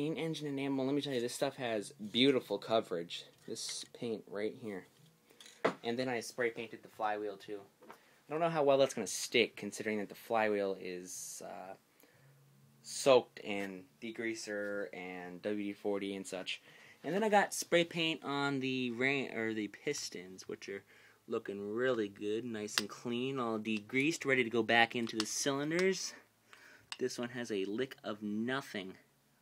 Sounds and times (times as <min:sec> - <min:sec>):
Speech: 0:00.0 - 0:04.9, 0:05.8 - 0:07.7, 0:08.3 - 0:11.8, 0:12.8 - 0:26.2, 0:27.0 - 0:29.1.